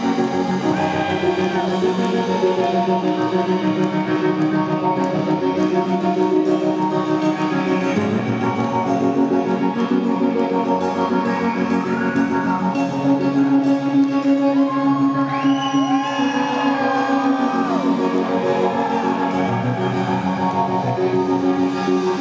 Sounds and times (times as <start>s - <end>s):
Tender music: 0.0s - 22.2s.